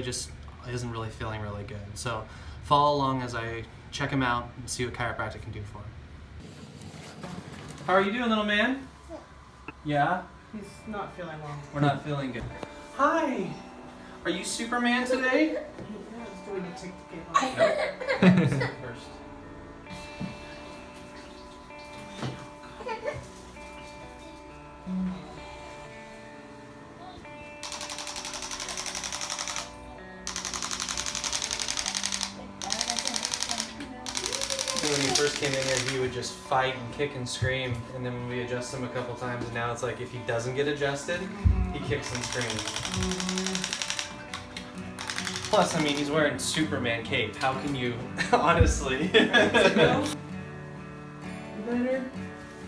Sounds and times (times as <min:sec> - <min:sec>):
Music: 0:00.0 - 0:04.1, 0:07.2 - 0:52.6.